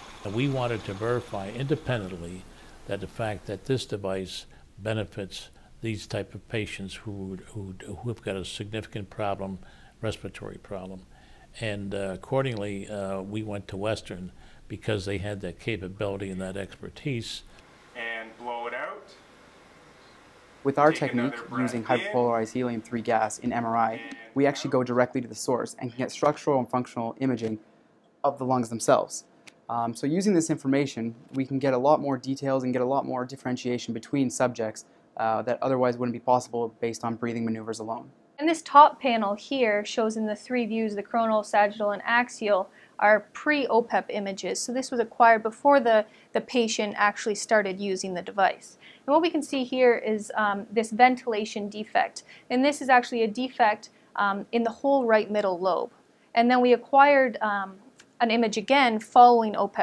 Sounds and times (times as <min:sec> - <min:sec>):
Speech: 0:00.3 - 0:11.0, 0:11.6 - 0:19.2, 0:20.7 - 0:27.6.